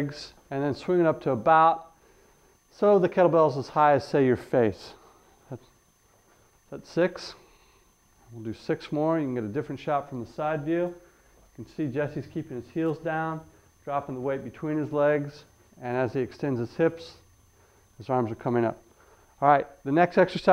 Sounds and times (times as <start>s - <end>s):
Speech: 0.0s - 1.9s, 2.7s - 5.7s, 6.7s - 7.4s, 8.3s - 11.0s, 11.6s - 17.3s, 18.0s - 18.8s, 19.4s - 20.5s.